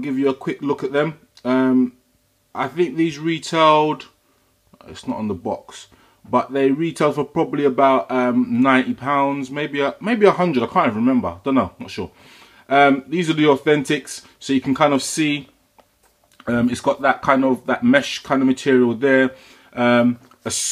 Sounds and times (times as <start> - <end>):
Speech: 0.0 - 4.2, 4.8 - 15.6, 16.4 - 20.7.